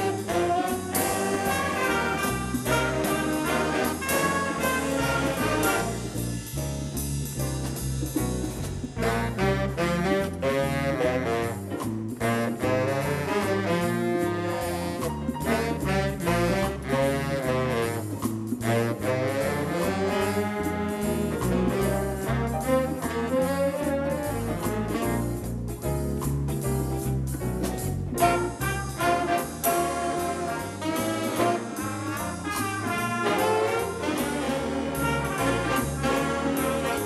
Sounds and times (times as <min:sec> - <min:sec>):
Jazz: 0:00.0 - 0:37.0.